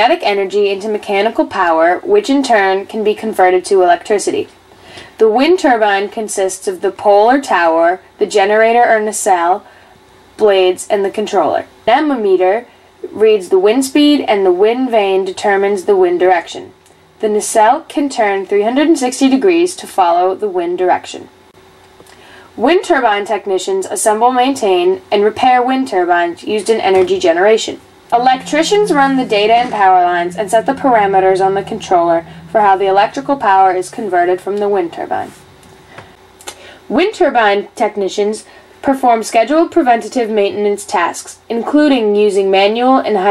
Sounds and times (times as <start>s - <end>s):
Speech: 0.0s - 4.6s, 5.2s - 9.7s, 10.4s - 21.3s, 22.6s - 35.4s, 36.9s - 43.3s.